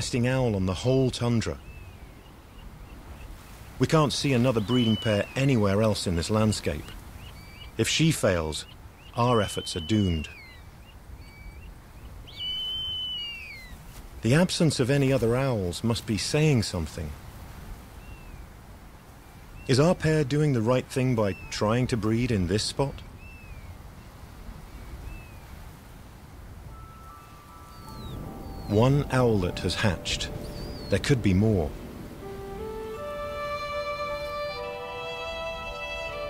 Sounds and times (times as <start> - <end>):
Chirp, tweet: 1.6 - 3.4, 4.2 - 7.8, 8.6 - 13.8, 18.0 - 18.5, 21.0 - 25.5, 26.7 - 31.1
Owl: 12.3 - 13.8.